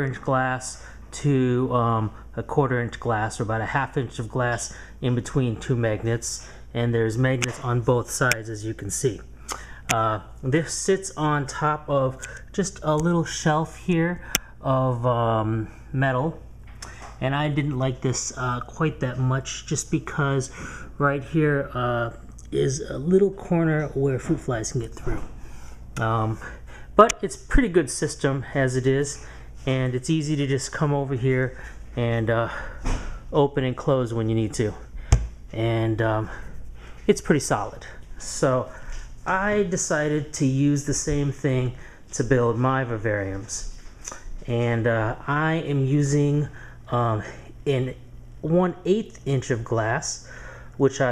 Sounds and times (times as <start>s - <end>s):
Speech: 0.0s - 16.5s, 17.2s - 25.3s, 26.0s - 34.9s, 35.5s - 36.5s, 37.1s - 51.1s.